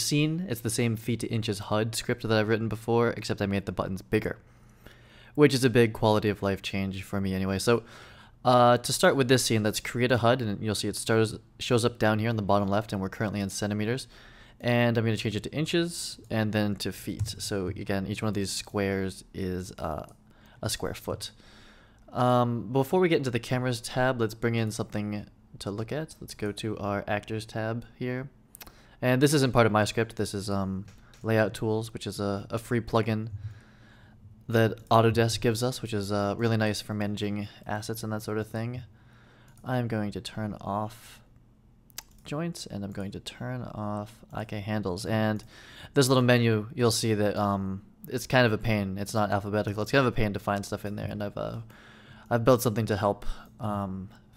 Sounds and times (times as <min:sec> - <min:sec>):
Speech: 0:00.0 - 0:04.4, 0:05.4 - 0:21.4, 0:22.1 - 0:28.4, 0:29.0 - 0:33.4, 0:34.5 - 0:38.9, 0:39.6 - 0:41.3, 0:42.0 - 0:51.7, 0:52.3 - 0:54.2.